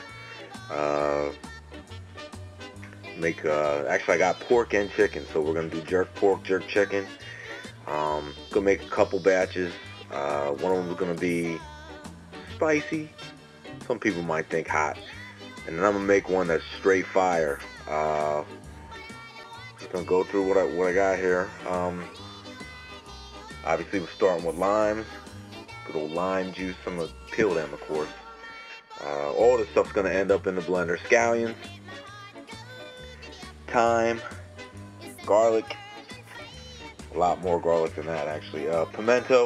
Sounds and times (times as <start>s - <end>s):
Music: 0.0s - 39.4s
Speech: 0.6s - 1.4s, 3.0s - 11.7s, 12.5s - 13.2s, 13.8s - 18.5s, 19.8s - 22.2s, 23.6s - 25.1s, 25.9s - 28.2s, 28.9s - 31.6s, 33.7s - 34.4s, 35.2s - 36.4s, 37.1s - 39.4s.